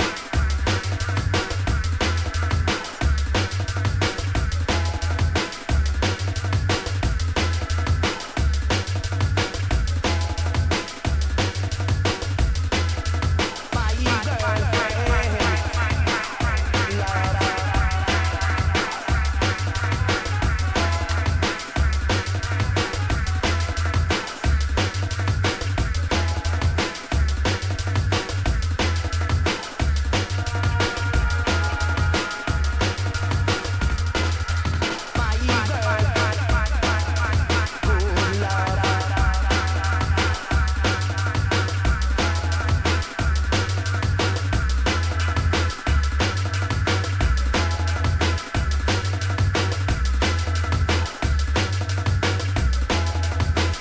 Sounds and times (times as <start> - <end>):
Drum and bass: 0.0 - 53.8
Reggae: 0.0 - 53.8.